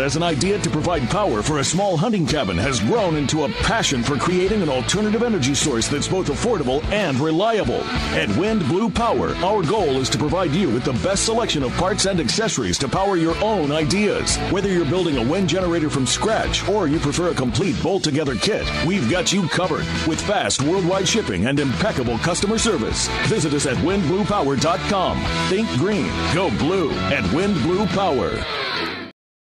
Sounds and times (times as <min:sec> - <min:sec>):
Speech: 0:00.0 - 0:28.8
Music: 0:00.0 - 0:29.2.